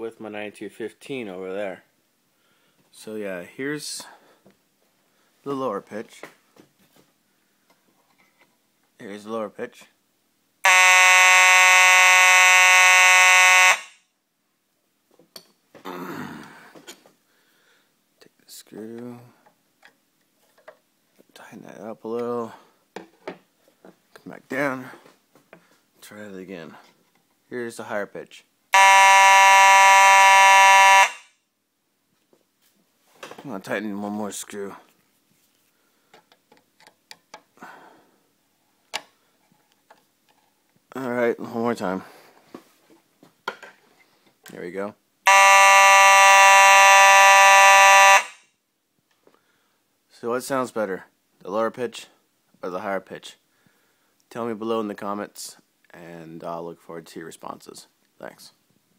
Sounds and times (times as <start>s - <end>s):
Speech: 0.0s - 1.9s, 2.9s - 4.2s, 5.4s - 6.3s, 9.0s - 10.0s, 18.2s - 19.4s, 21.3s - 22.6s, 24.2s - 25.0s, 26.0s - 26.9s, 27.5s - 28.5s, 33.4s - 34.9s, 40.9s - 42.1s, 44.5s - 45.0s, 50.1s - 53.4s, 54.3s - 58.6s.